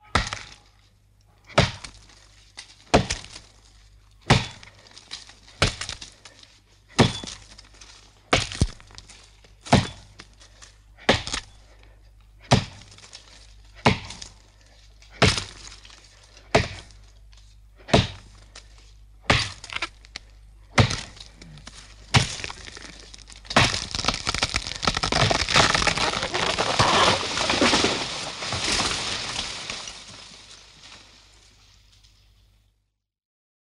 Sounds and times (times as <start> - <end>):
Crushing: 18.3 - 32.3.